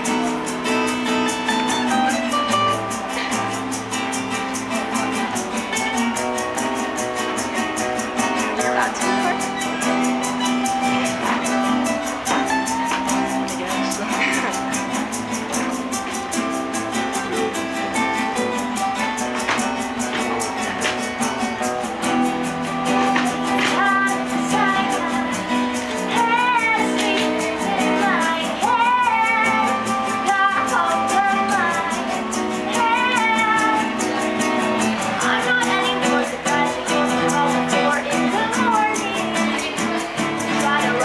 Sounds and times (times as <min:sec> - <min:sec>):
Music: 0:00.0 - 0:41.0.